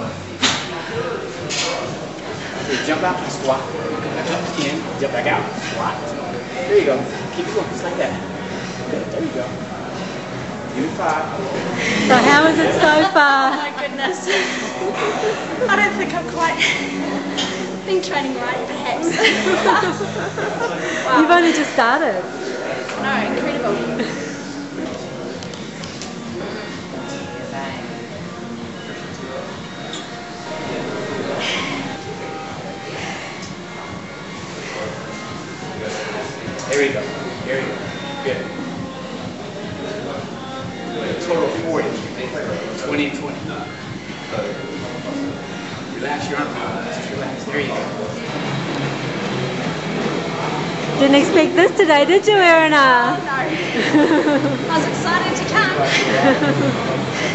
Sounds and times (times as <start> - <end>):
Music: 0.0 - 57.3.